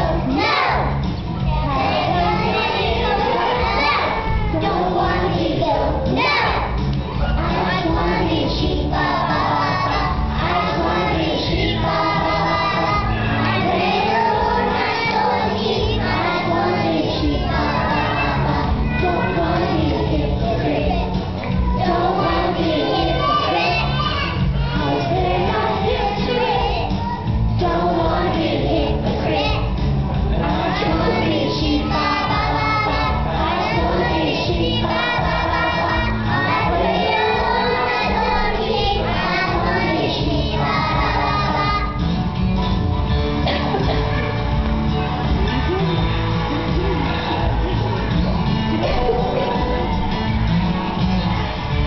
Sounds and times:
Music: 0.0 - 51.8.

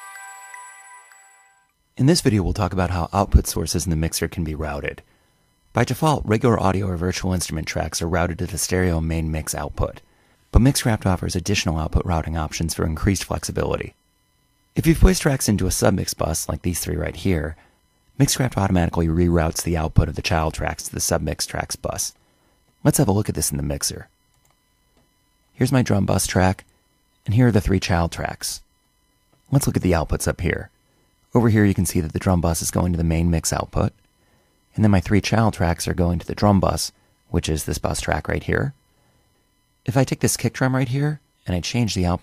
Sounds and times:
Speech: 2.0 - 5.1, 5.7 - 10.0, 10.6 - 14.0, 14.8 - 17.6, 18.2 - 22.2, 22.8 - 24.1, 25.6 - 28.7, 29.5 - 30.7, 31.3 - 34.0, 34.7 - 38.8, 39.9 - 42.2.

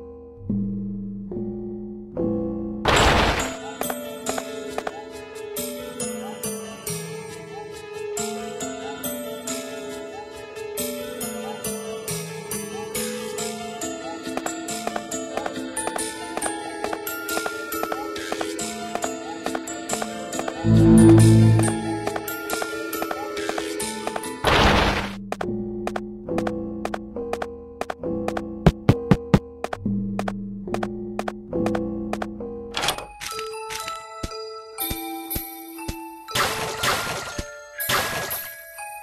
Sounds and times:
Music: 0.0 - 39.0.

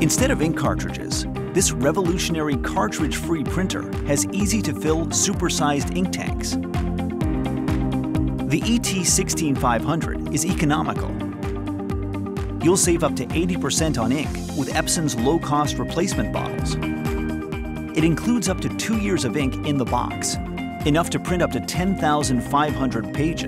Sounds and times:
Speech: 0.0 - 6.6, 8.5 - 11.2, 12.6 - 16.8, 18.0 - 23.4
Music: 0.0 - 23.4.

